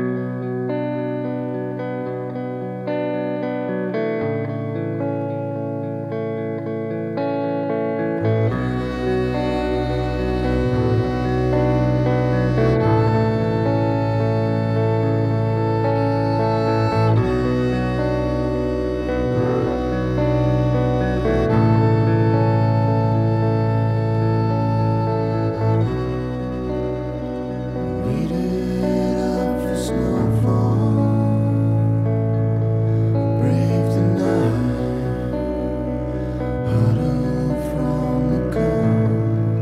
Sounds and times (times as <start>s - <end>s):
Music: 0.0s - 39.6s.